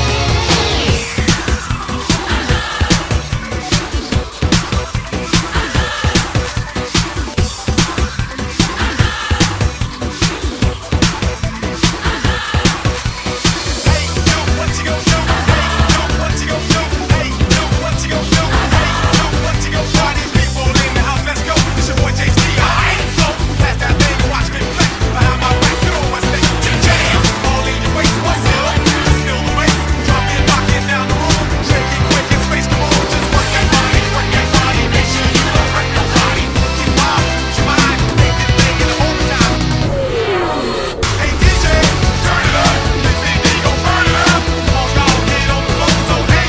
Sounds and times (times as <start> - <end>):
Music: 0.0 - 46.4.